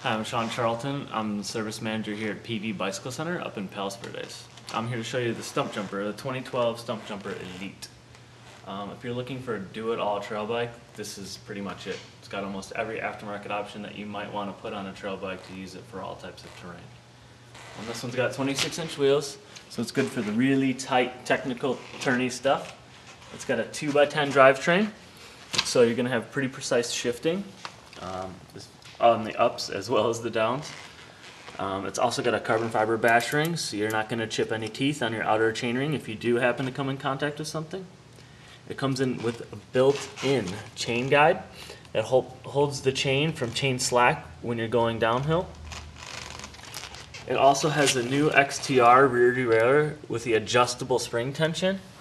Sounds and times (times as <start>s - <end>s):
Speech: 0.0s - 8.0s, 8.6s - 17.0s, 17.8s - 25.0s, 25.6s - 30.9s, 31.6s - 38.0s, 38.7s - 45.6s, 47.2s - 51.9s.